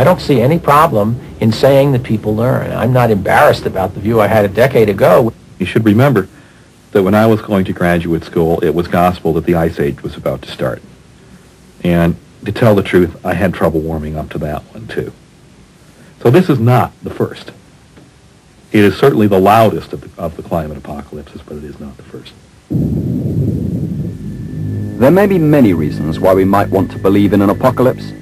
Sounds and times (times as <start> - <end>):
White noise: 0.0 - 28.2.